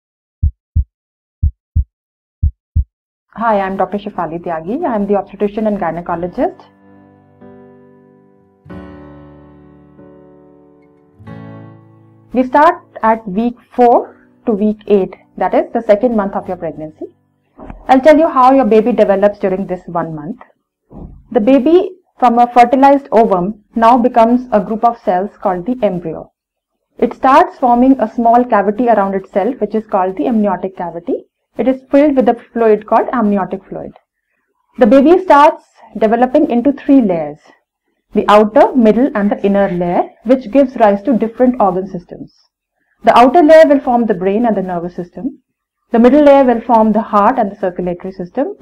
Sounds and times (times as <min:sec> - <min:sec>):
Speech: 0:03.4 - 0:06.7, 0:12.4 - 0:20.4, 0:21.3 - 0:26.3, 0:27.0 - 0:34.0, 0:34.8 - 0:37.5, 0:38.2 - 0:42.4, 0:43.0 - 0:48.6
Music: 0:05.3 - 0:18.1.